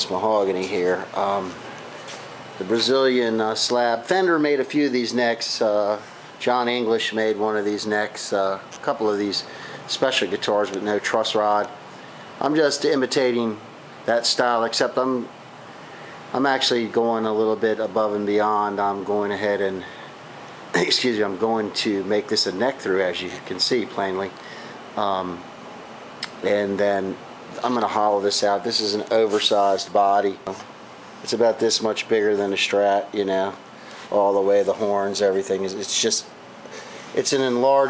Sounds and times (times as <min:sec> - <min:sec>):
Speech: 0:00.0 - 0:01.6, 0:02.6 - 0:11.8, 0:12.4 - 0:15.3, 0:16.3 - 0:20.0, 0:20.7 - 0:24.4, 0:25.0 - 0:25.5, 0:26.2 - 0:36.4, 0:37.1 - 0:37.8.